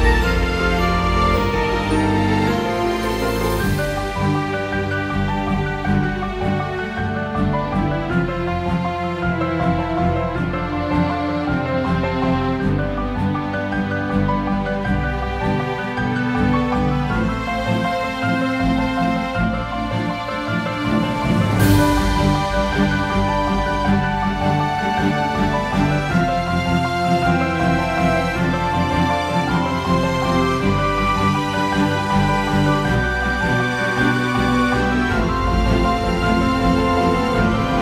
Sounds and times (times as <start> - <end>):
Music: 0.0 - 37.8.